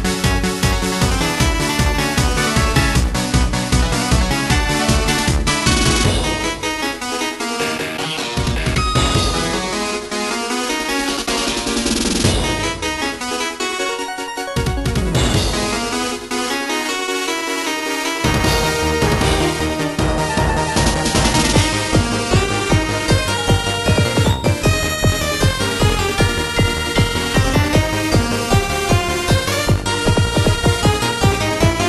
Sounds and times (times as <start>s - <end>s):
Music: 0.0s - 31.8s.